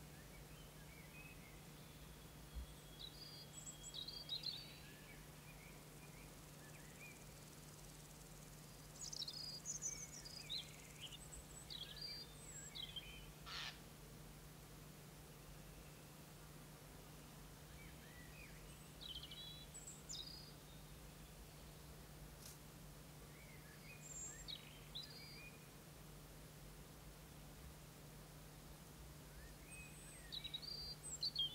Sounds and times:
Environmental noise: 0:00.0 - 0:31.5.

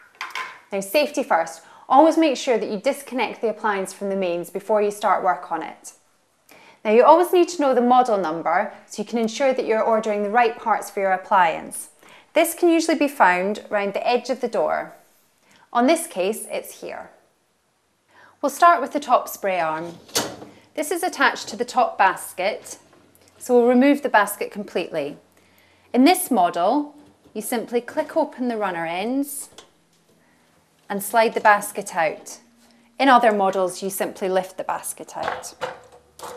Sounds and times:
Speech: 0:00.7 - 0:06.0, 0:06.8 - 0:15.0, 0:15.8 - 0:17.2, 0:18.4 - 0:20.0, 0:20.8 - 0:22.8, 0:23.4 - 0:25.2, 0:26.0 - 0:29.6, 0:30.9 - 0:35.6.

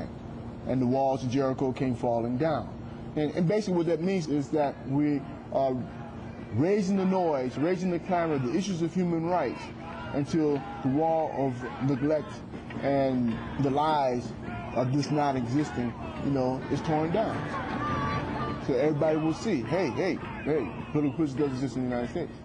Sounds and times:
Speech: 0:00.7 - 0:05.9, 0:06.5 - 0:17.4, 0:18.6 - 0:22.4.

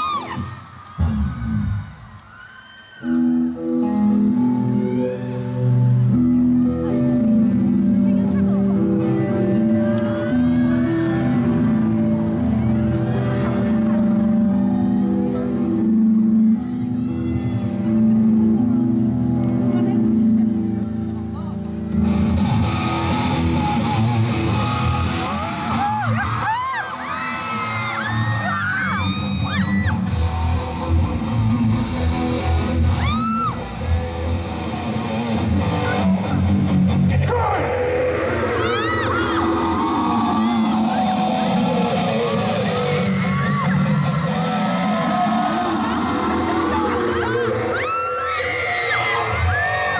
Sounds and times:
Guitar: 0:00.0 - 0:49.9.

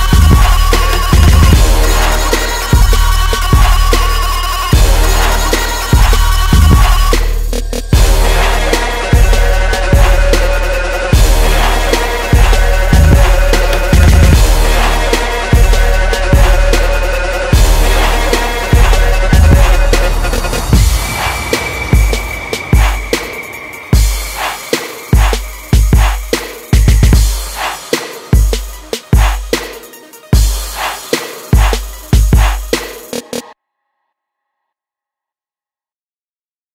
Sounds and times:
Music: 0:00.0 - 0:33.6.

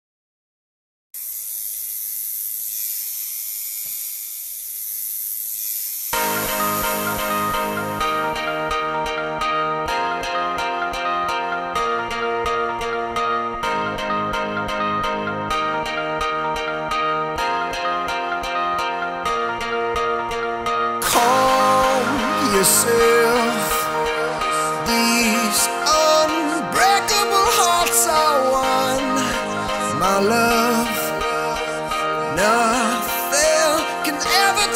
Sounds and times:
Music: 0:06.2 - 0:34.7.

